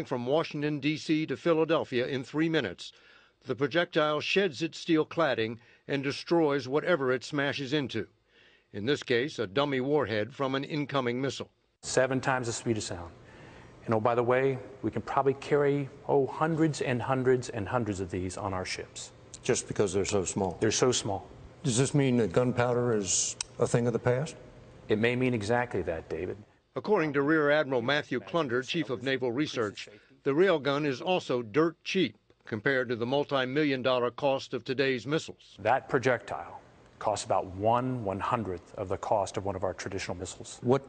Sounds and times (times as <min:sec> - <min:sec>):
Speech: 0:00.0 - 0:08.1, 0:08.7 - 0:13.2, 0:13.8 - 0:40.8.